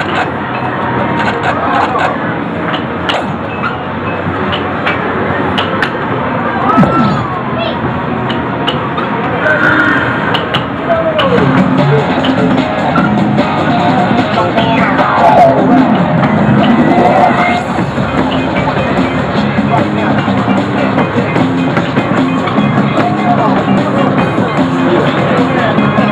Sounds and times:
Music: 10.8s - 26.1s.

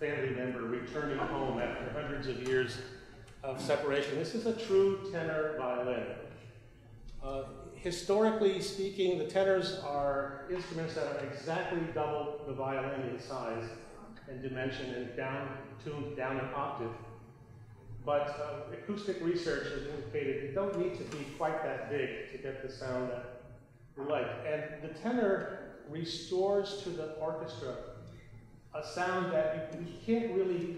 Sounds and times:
Speech: 0.0s - 6.3s, 7.1s - 17.1s, 17.9s - 23.4s, 24.0s - 28.0s, 28.8s - 30.7s.

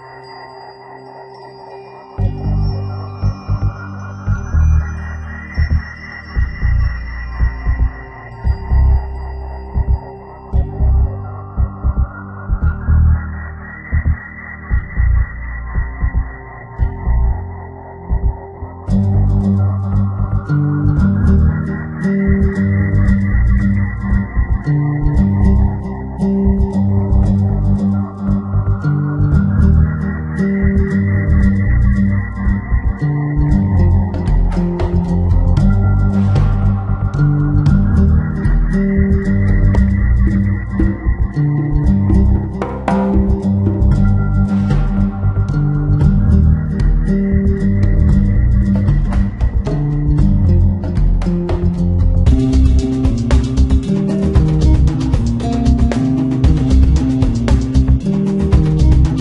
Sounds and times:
Music: 0.0s - 59.2s.

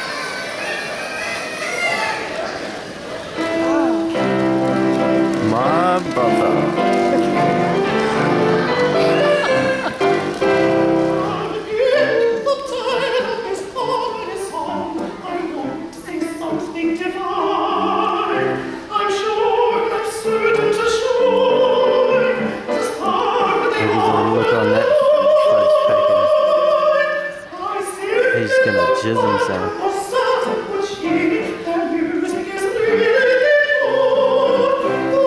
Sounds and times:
Opera: 0.0s - 35.2s
Speech: 5.4s - 6.8s, 23.8s - 26.3s, 28.4s - 29.7s.

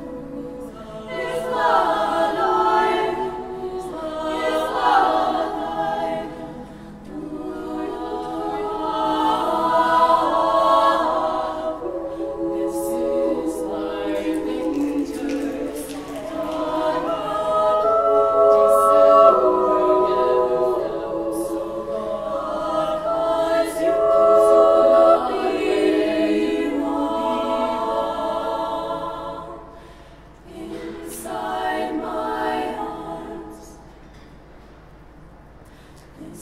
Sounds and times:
A capella: 0.0s - 34.4s, 35.7s - 36.4s
Choir: 0.0s - 35.0s, 35.7s - 36.4s.

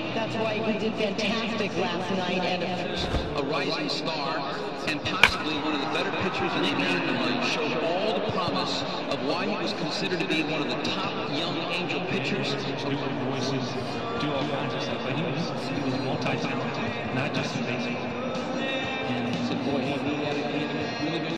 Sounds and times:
Music: 0.0s - 21.3s
Speech: 0.0s - 21.3s.

